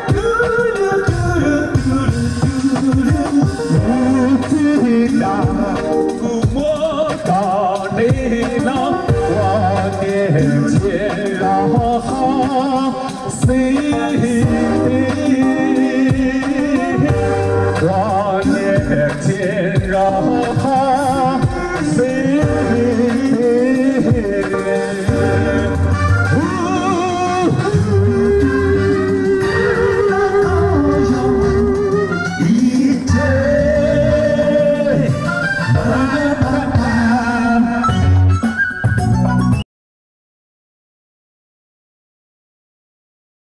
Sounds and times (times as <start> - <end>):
Male singing: 0.0 - 38.0
Vocal music: 0.0 - 39.6.